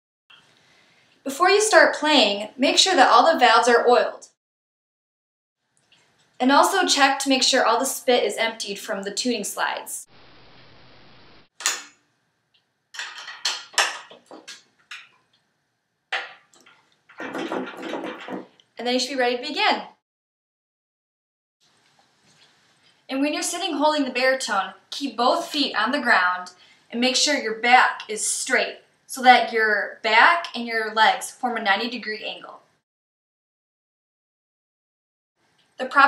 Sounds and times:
Speech: 0:01.3 - 0:04.4, 0:06.4 - 0:10.1, 0:18.8 - 0:20.0, 0:23.1 - 0:32.6, 0:35.8 - 0:36.0.

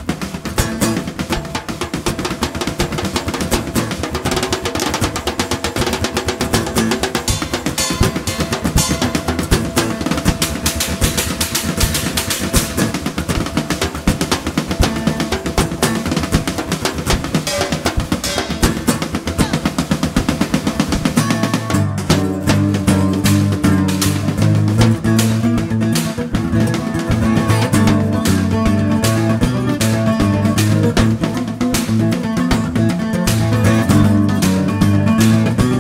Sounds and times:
Country: 0:00.0 - 0:35.8
Guitar: 0:00.0 - 0:35.8
Rimshot: 0:00.0 - 0:35.8.

